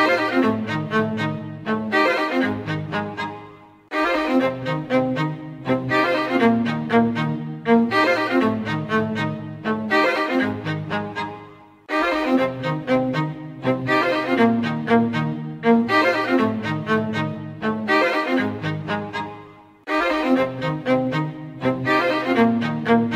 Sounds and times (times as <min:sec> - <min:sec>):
Orchestra: 0:00.0 - 0:23.1.